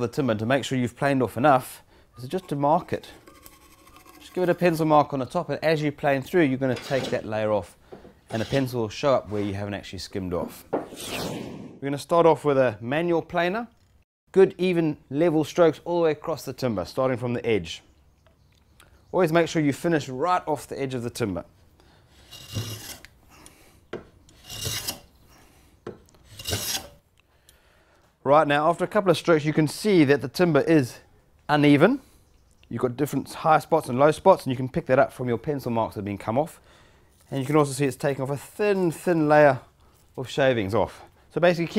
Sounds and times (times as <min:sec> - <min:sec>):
Filing (rasp): 0:08.3 - 0:08.8, 0:22.2 - 0:23.1, 0:24.3 - 0:25.1, 0:26.2 - 0:27.0
Wood: 0:10.5 - 0:11.0, 0:22.2 - 0:23.1, 0:23.9 - 0:25.1, 0:25.8 - 0:26.9.